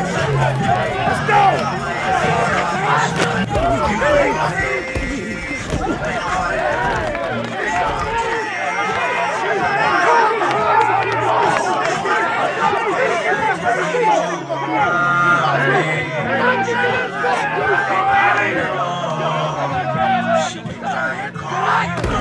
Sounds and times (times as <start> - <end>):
Inside, public space: 0.0 - 22.2
Music: 0.0 - 22.2
Speech: 0.0 - 22.2.